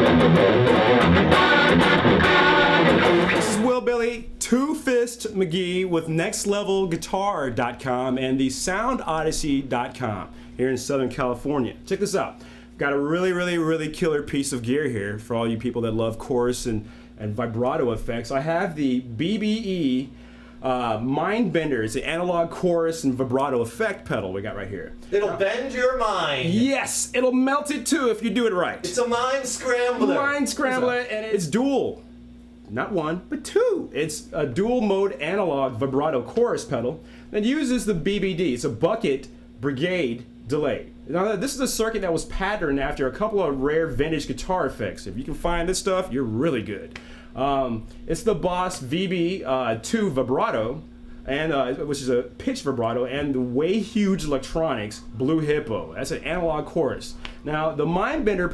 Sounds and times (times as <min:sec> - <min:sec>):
Speech: 0:03.5 - 0:32.0, 0:32.7 - 0:58.5.